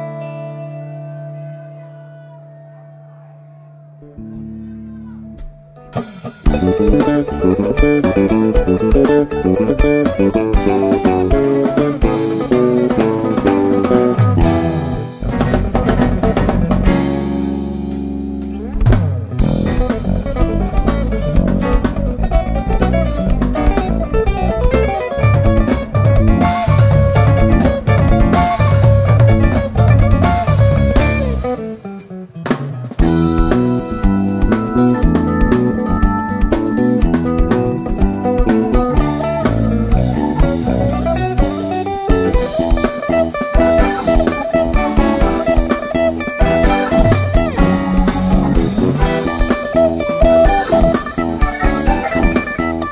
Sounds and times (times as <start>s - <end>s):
Music: 0.0s - 52.9s.